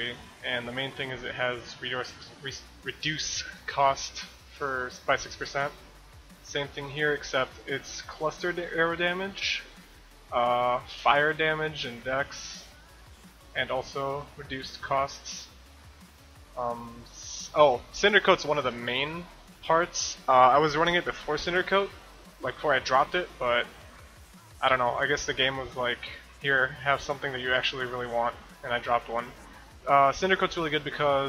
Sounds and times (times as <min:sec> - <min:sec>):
Speech: 0:00.0 - 0:05.8, 0:06.4 - 0:09.7, 0:10.3 - 0:12.7, 0:13.6 - 0:15.5, 0:16.6 - 0:23.7, 0:24.6 - 0:31.2
Music: 0:00.0 - 0:31.2.